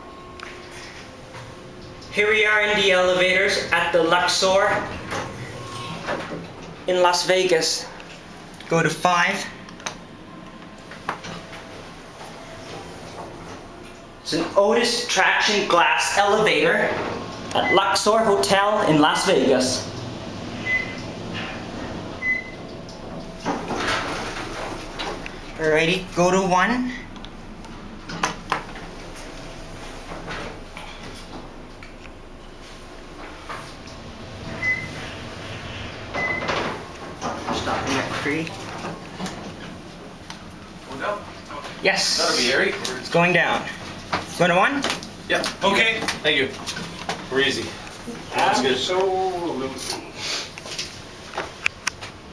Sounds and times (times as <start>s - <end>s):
Speech: 6.9s - 7.9s, 14.2s - 19.9s, 47.3s - 50.0s.